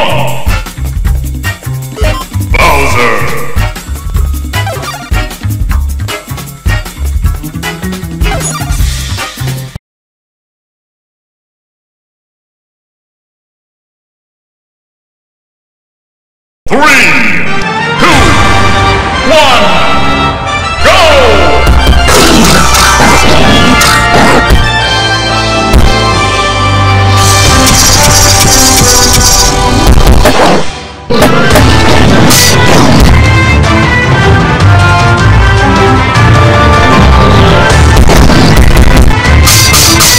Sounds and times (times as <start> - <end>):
Music: 0.0 - 9.8, 16.8 - 40.1.